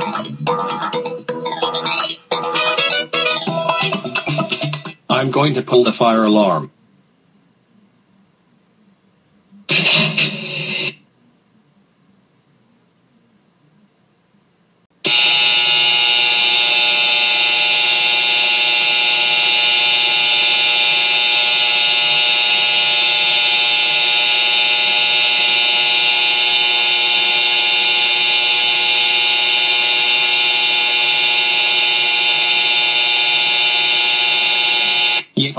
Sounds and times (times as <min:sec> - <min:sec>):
Buzzer: 0:15.0 - 0:35.4.